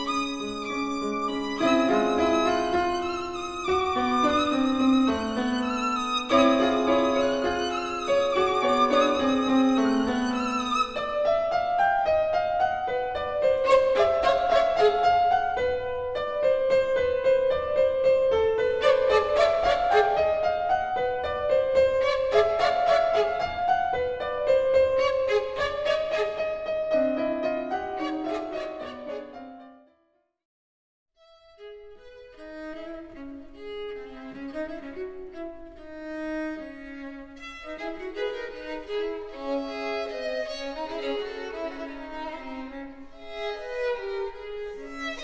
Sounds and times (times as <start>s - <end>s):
Violin, fiddle: 0.0s - 11.6s, 13.2s - 15.8s, 18.6s - 20.6s, 21.3s - 29.5s, 31.2s - 45.2s
Orchestra: 0.0s - 11.8s, 13.1s - 15.8s, 18.6s - 29.7s, 31.6s - 45.2s
Cello: 0.0s - 29.7s, 31.2s - 45.2s
Piano: 0.0s - 30.2s, 31.2s - 45.2s.